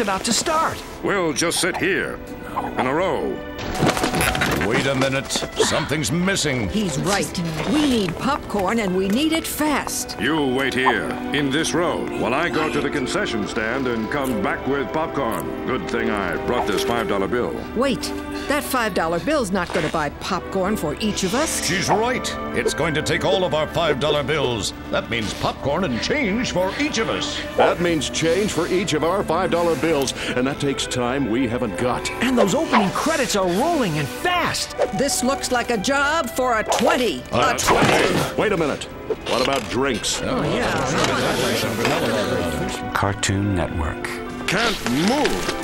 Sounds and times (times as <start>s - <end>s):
Music: 0.0s - 45.6s
Speech: 10.2s - 45.5s.